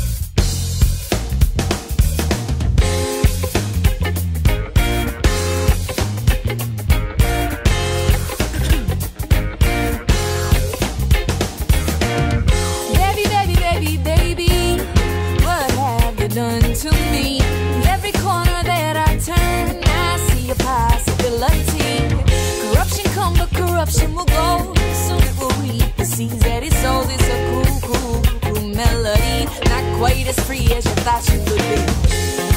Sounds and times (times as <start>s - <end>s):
Music: 0.0s - 32.5s.